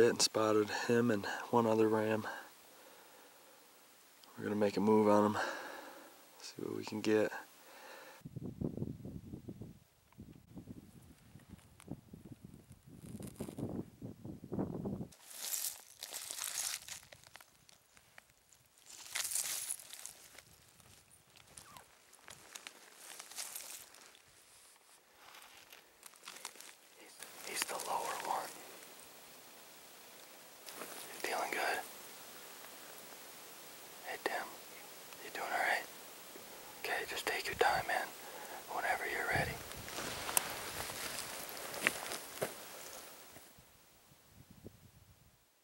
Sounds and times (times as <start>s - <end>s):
Outside, rural or natural: 0.0s - 45.6s.